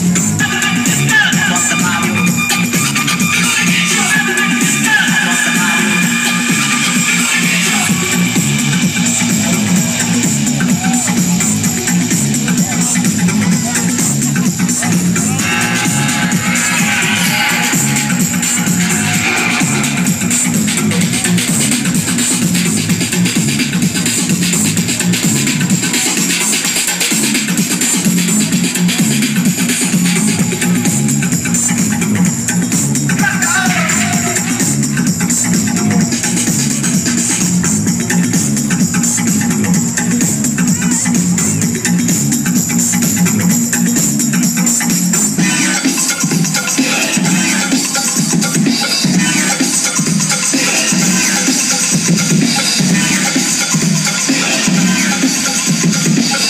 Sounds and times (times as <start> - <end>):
Dubstep: 0.0 - 56.5
Electronic dance music: 0.0 - 56.5
Electronica: 0.0 - 56.5
House music: 0.0 - 56.5
Rhythm and blues: 0.0 - 56.5
Techno: 0.0 - 56.5
Trance music: 0.0 - 56.5.